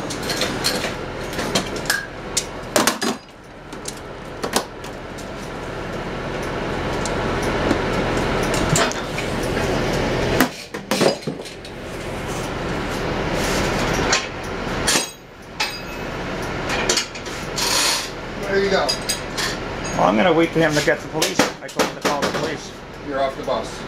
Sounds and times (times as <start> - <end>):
Bus: 0.0 - 23.8
Speech: 18.4 - 19.0, 20.0 - 23.8.